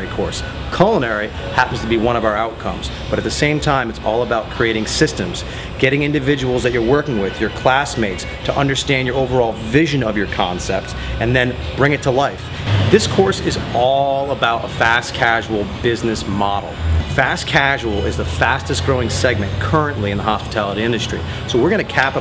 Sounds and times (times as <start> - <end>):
Speech: 0.0 - 22.2.